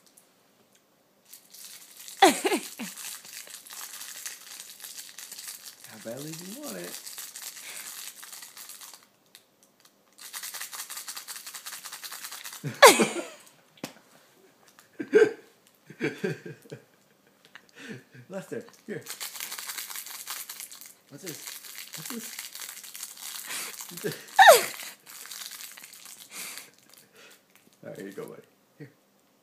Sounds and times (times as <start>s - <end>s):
Speech: 5.9s - 6.9s, 27.8s - 28.9s.